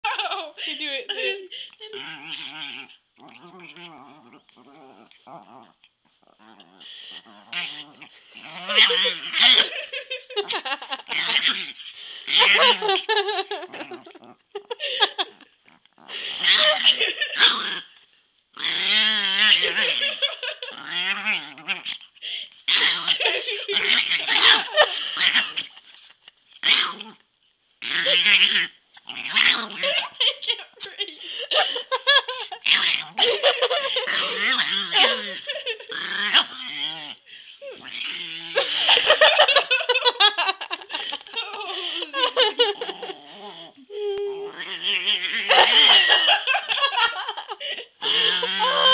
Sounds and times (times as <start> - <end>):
Speech: 0.0 - 1.6, 41.4 - 42.2, 43.9 - 44.7.